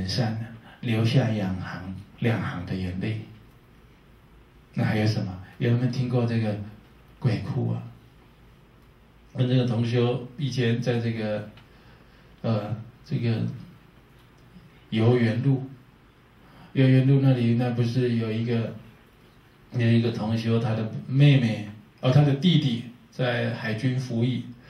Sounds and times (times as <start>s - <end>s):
Speech: 0.0s - 3.4s, 4.7s - 8.0s, 9.3s - 11.6s, 12.4s - 13.7s, 14.9s - 15.8s, 16.7s - 18.9s, 19.7s - 24.6s.